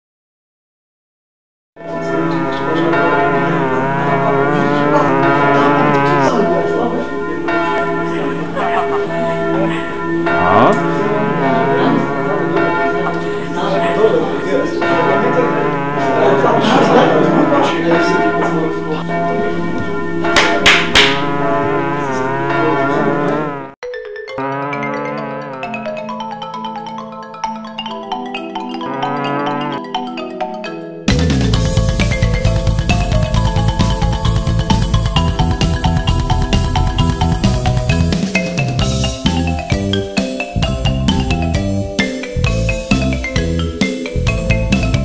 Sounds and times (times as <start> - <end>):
Music: 1.8 - 23.0, 23.8 - 45.0.